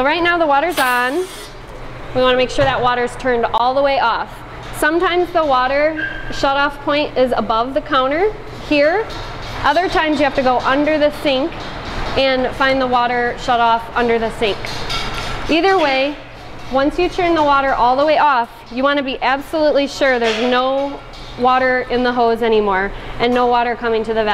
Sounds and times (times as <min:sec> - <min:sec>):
Speech: 0:02.2 - 0:11.5, 0:12.2 - 0:14.6, 0:15.5 - 0:24.3.